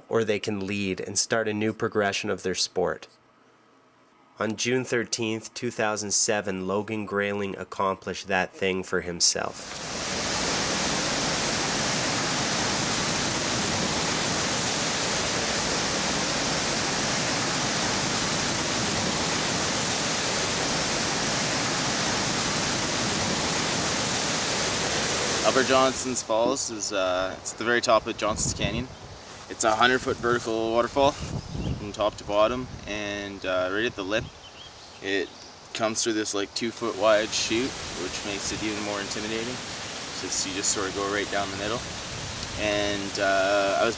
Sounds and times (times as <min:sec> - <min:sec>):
Speech: 0:00.0 - 0:03.1, 0:04.4 - 0:09.7, 0:25.4 - 0:28.9, 0:29.5 - 0:34.3, 0:35.0 - 0:39.6, 0:40.2 - 0:41.8, 0:42.6 - 0:43.9.